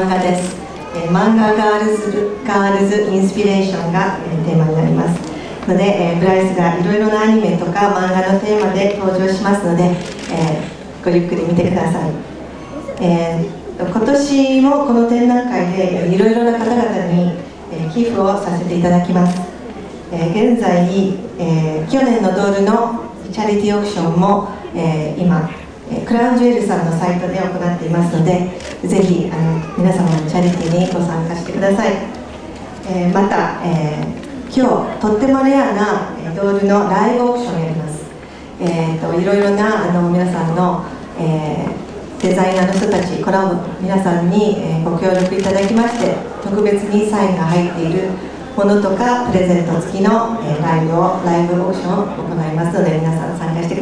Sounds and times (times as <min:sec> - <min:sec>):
Female speech, woman speaking: 0:00.0 - 0:12.2, 0:13.0 - 0:19.5, 0:20.1 - 0:32.1, 0:32.8 - 0:53.8
Narration, monologue: 0:00.0 - 0:53.8.